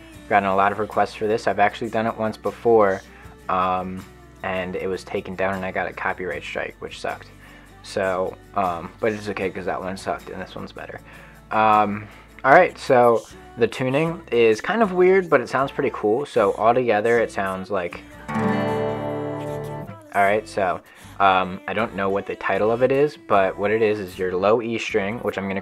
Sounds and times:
Music: 0:00.0 - 0:25.6
Speech: 0:00.3 - 0:18.1, 0:19.9 - 0:25.6.

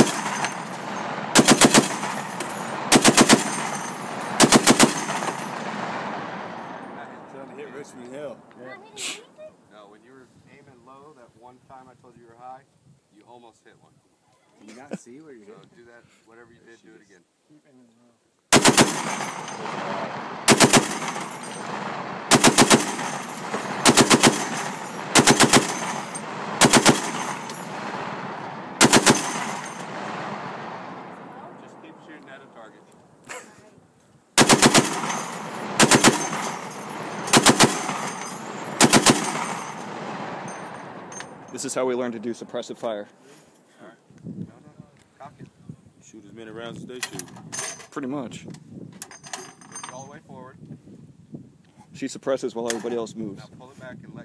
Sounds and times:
Machine gun: 0:00.0 - 0:06.9, 0:18.5 - 0:31.1, 0:34.4 - 0:41.8
Outside, rural or natural: 0:00.0 - 0:54.2
Speech: 0:07.0 - 0:18.2, 0:31.3 - 0:33.8, 0:41.6 - 0:47.3, 0:47.9 - 0:48.5, 0:49.9 - 0:50.6, 0:51.9 - 0:54.2.

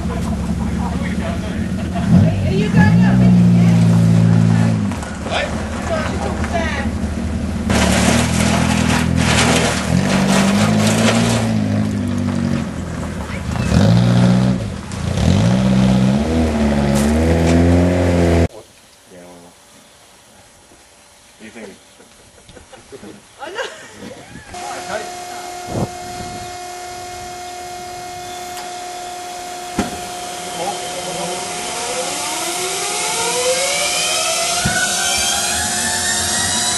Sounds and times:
Speech: 0:00.1 - 0:03.8, 0:23.0 - 0:25.5, 0:30.6 - 0:31.5.

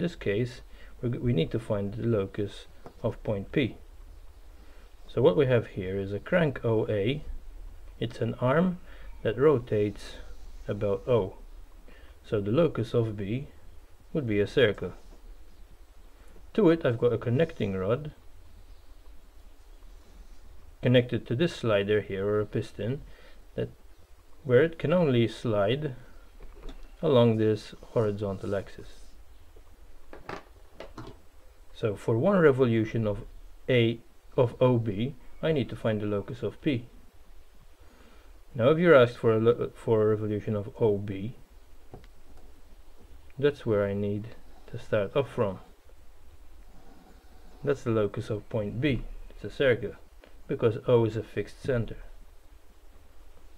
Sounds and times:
Speech: 0:00.0 - 0:03.8, 0:05.1 - 0:07.3, 0:08.0 - 0:11.4, 0:12.2 - 0:15.0, 0:16.5 - 0:18.2, 0:20.8 - 0:23.0, 0:23.6 - 0:23.8, 0:24.4 - 0:26.1, 0:27.0 - 0:29.2, 0:31.7 - 0:37.0, 0:38.5 - 0:41.4, 0:43.4 - 0:45.8, 0:47.6 - 0:52.2.

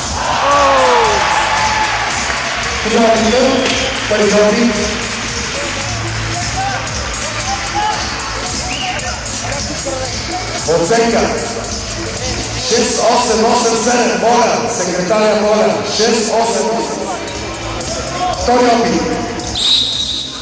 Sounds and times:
Music: 0:00.0 - 0:20.4
Speech: 0:02.8 - 0:05.0, 0:08.7 - 0:11.5, 0:12.2 - 0:19.4.

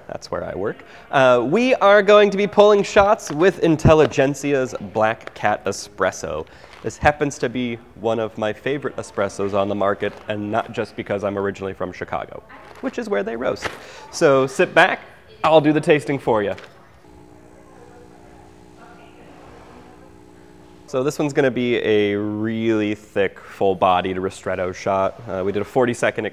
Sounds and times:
Speech: 0:00.0 - 0:26.3.

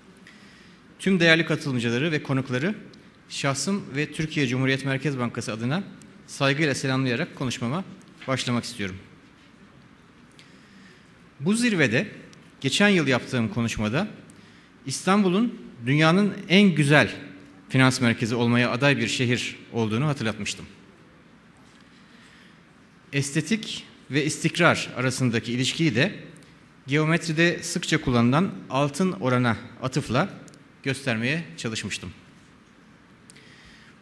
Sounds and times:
Narration, monologue: 0:00.0 - 0:34.0
Male speech, man speaking: 0:01.0 - 0:09.1, 0:11.4 - 0:14.2, 0:14.9 - 0:20.8, 0:23.2 - 0:26.2, 0:26.9 - 0:32.2.

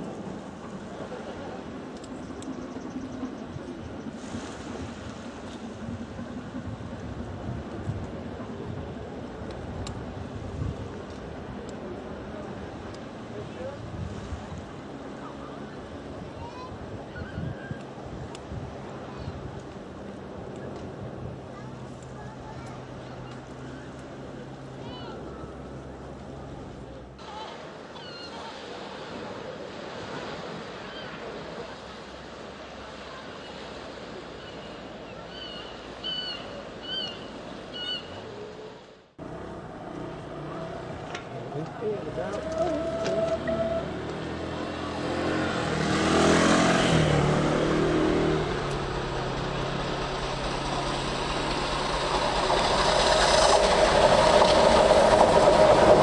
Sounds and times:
Train: 0:00.0 - 0:13.1, 0:48.5 - 0:56.0
Railroad car, train wagon: 0:48.4 - 0:56.0.

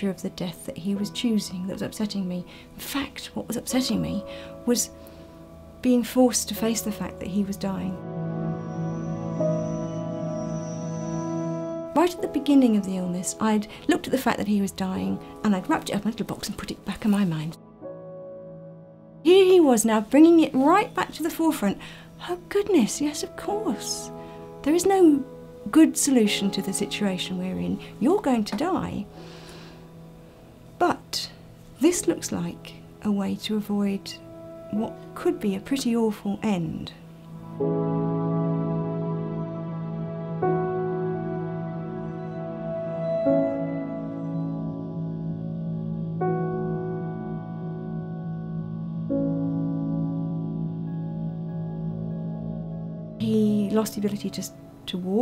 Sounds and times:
Distortion: 0:00.0 - 0:55.2
Effects unit: 0:07.1 - 0:13.5, 0:37.0 - 0:53.6.

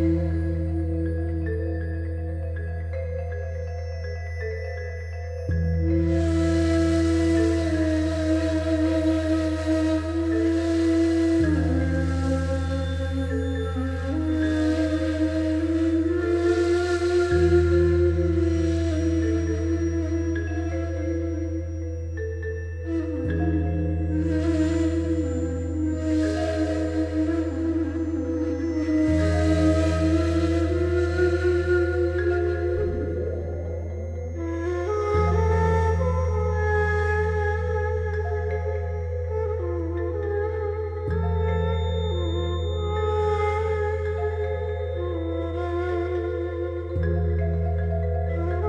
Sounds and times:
Music: 0:00.0 - 0:48.6.

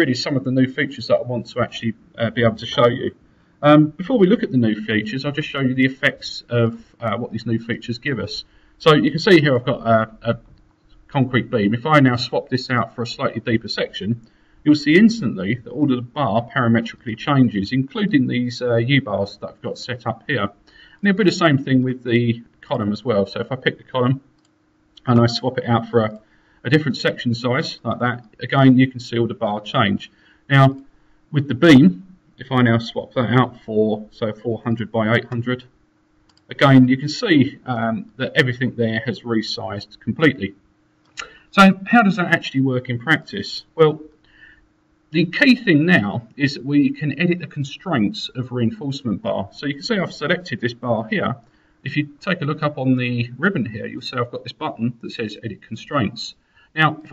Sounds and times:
Speech: 0:00.0 - 0:10.5, 0:11.1 - 0:24.3, 0:25.0 - 0:35.7, 0:36.5 - 0:40.6, 0:41.2 - 0:44.1, 0:45.1 - 0:57.1.

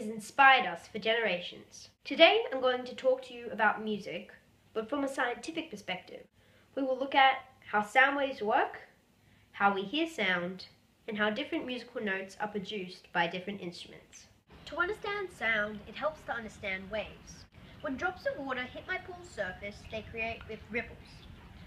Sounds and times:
Speech: 0:00.0 - 0:09.0, 0:09.6 - 0:21.3.

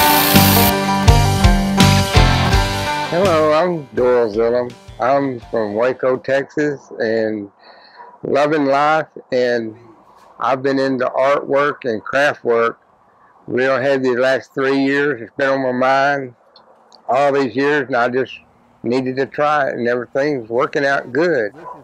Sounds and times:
Speech: 0:03.1 - 0:07.5, 0:08.2 - 0:12.8, 0:13.5 - 0:16.4, 0:17.0 - 0:21.8.

